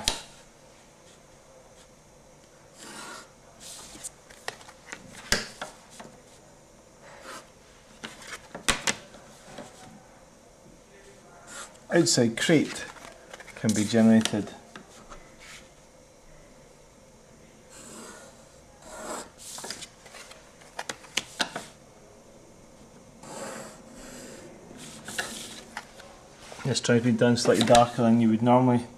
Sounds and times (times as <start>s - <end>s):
Inside, small room: 0.0s - 28.9s
Speech: 10.8s - 13.0s, 13.6s - 14.6s, 26.6s - 28.9s.